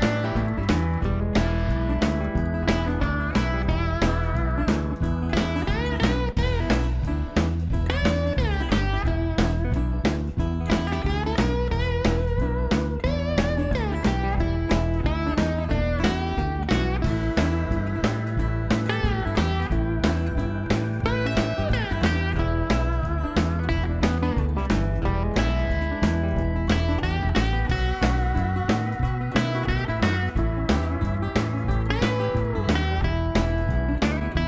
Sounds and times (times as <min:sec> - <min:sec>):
Music: 0:00.0 - 0:34.4.